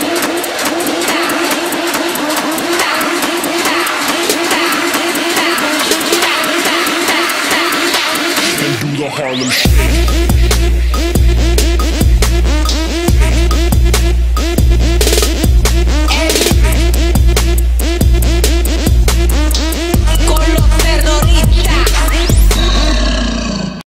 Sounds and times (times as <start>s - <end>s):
Music: 0.0s - 23.3s
Animal: 22.6s - 23.8s.